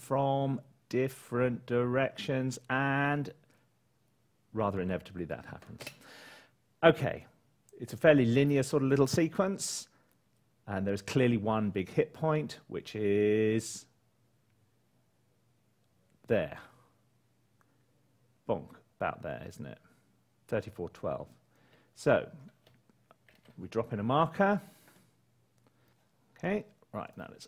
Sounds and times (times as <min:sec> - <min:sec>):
Speech: 0:00.0 - 0:03.4, 0:04.5 - 0:05.8, 0:06.8 - 0:09.9, 0:10.7 - 0:14.0, 0:16.2 - 0:16.9, 0:18.4 - 0:19.9, 0:20.5 - 0:21.4, 0:22.0 - 0:22.6, 0:23.6 - 0:24.7, 0:26.4 - 0:27.4.